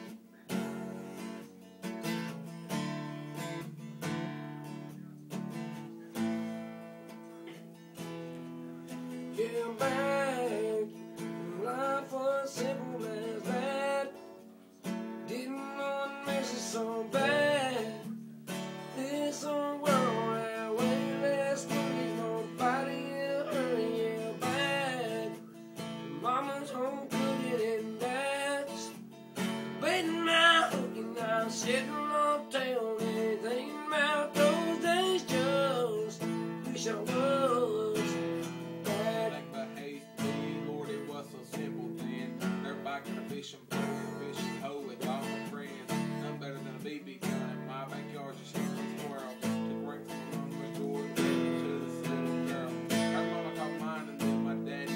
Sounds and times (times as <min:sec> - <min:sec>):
Music: 0:00.0 - 0:54.9
Male singing: 0:09.3 - 0:14.2, 0:15.3 - 0:18.1, 0:18.9 - 0:25.4, 0:26.1 - 0:29.0, 0:29.8 - 0:54.9.